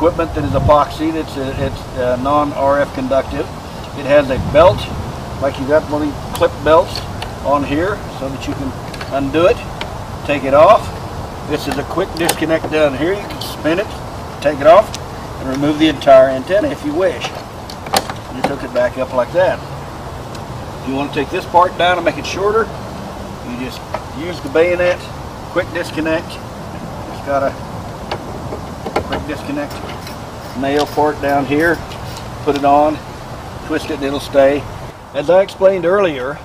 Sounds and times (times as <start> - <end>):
Speech: 0.0 - 17.4, 18.3 - 19.6, 20.8 - 22.7, 23.5 - 26.4, 27.1 - 27.6, 29.2 - 29.9, 30.6 - 31.8, 32.5 - 33.0, 33.6 - 36.4.